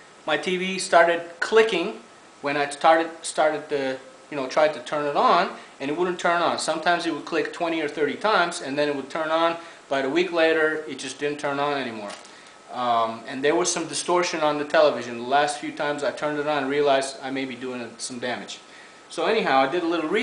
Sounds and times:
Speech: 0.3 - 20.2.

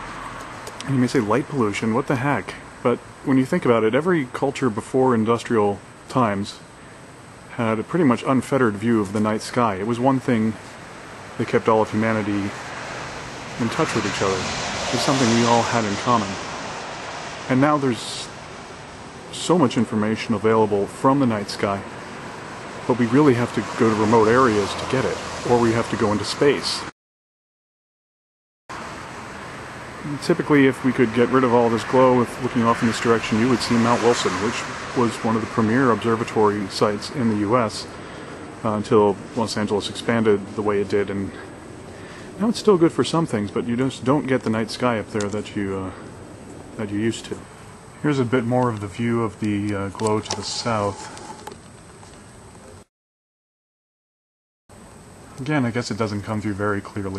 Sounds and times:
Outside, rural or natural: 0.0 - 27.0, 28.7 - 52.9, 54.7 - 57.1
Speech: 0.8 - 6.7, 7.5 - 10.6, 11.4 - 12.6, 13.6 - 16.5, 17.5 - 18.4, 19.3 - 21.9, 22.9 - 26.9, 30.0 - 38.0, 38.6 - 41.5, 42.4 - 46.1, 46.8 - 51.2, 55.4 - 57.1.

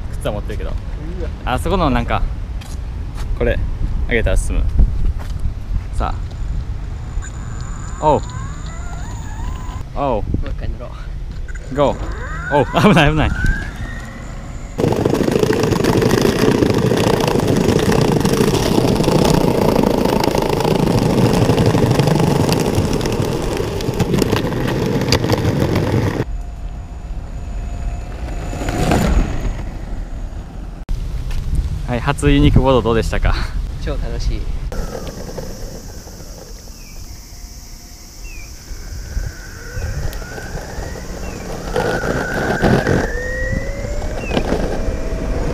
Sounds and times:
Speech: 0.2 - 2.3, 31.9 - 34.5.

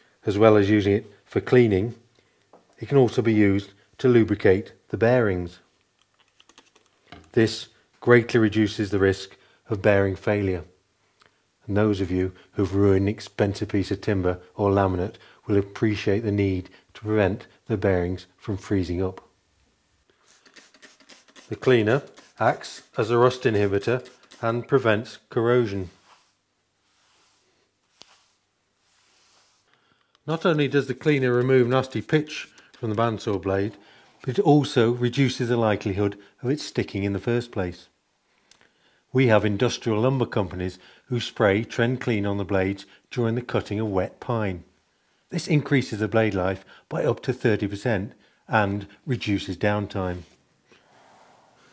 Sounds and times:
Speech: 0.2 - 2.0, 2.8 - 5.7, 7.3 - 10.8, 11.6 - 19.3, 21.5 - 26.0, 30.3 - 38.0, 39.1 - 44.7, 45.3 - 50.4.

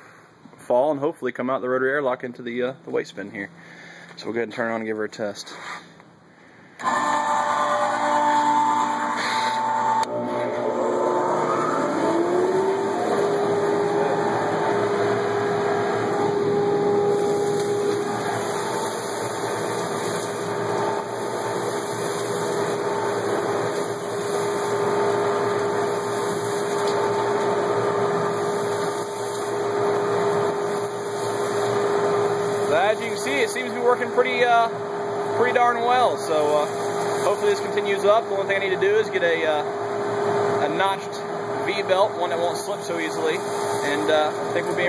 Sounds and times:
Speech: 0.6 - 3.5, 4.2 - 5.6, 32.7 - 34.8, 35.4 - 39.7, 40.6 - 44.8.

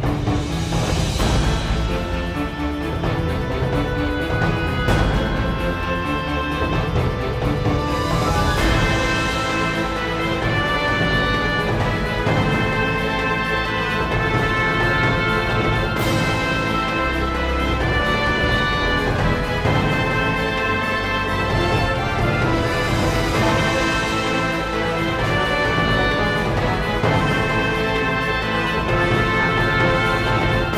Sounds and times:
Music: 0.0 - 30.7.

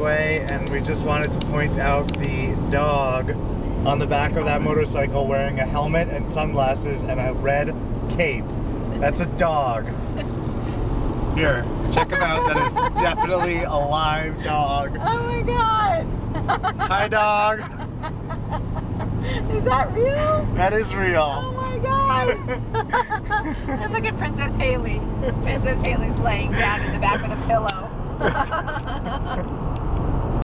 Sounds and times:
Vehicle: 0.0 - 30.4.

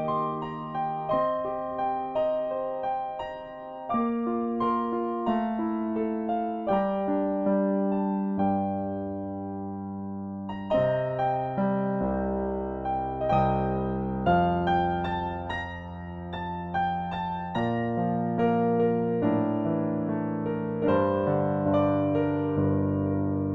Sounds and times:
Music: 0.0 - 23.5.

